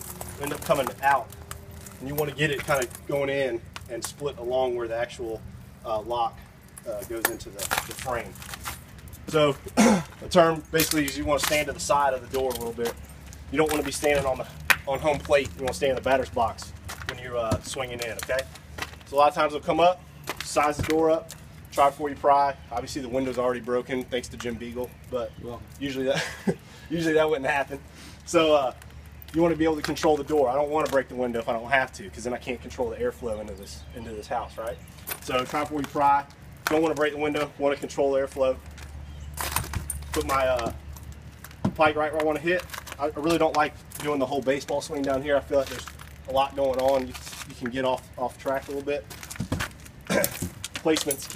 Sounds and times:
Speech: 0.4 - 1.3, 2.0 - 8.4, 9.3 - 9.6, 10.2 - 18.5, 19.1 - 26.2, 26.9 - 38.6, 40.2 - 40.8, 41.8 - 49.0, 50.8 - 51.3.

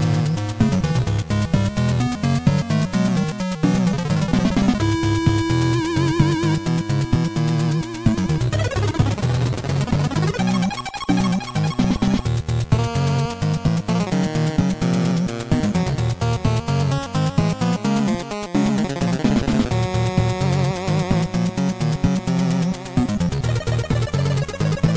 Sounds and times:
Background music: 0.0 - 24.9
Soundtrack music: 0.0 - 24.9
Video game music: 0.0 - 24.9.

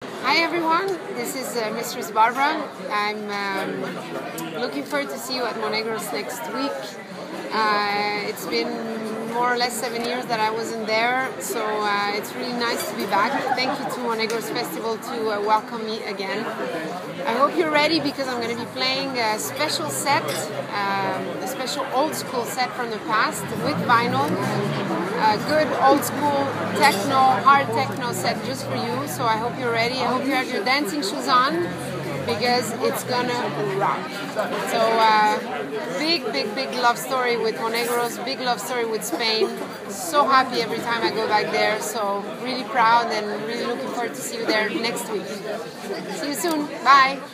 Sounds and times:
Speech: 0.2 - 16.6, 17.2 - 47.3.

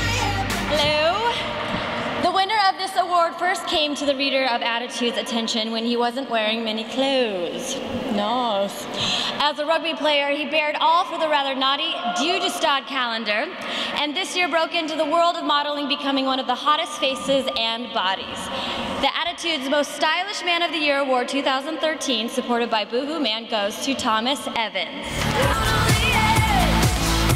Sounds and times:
Female speech, woman speaking: 0.7 - 1.4, 2.2 - 25.0.

